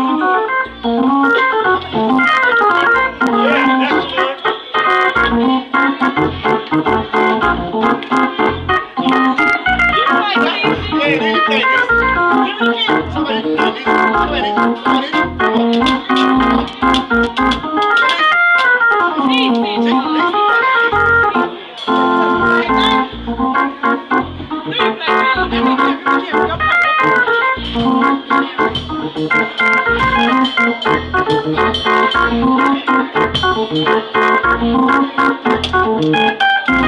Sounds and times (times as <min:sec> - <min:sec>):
Hammond organ: 0:00.0 - 0:36.8.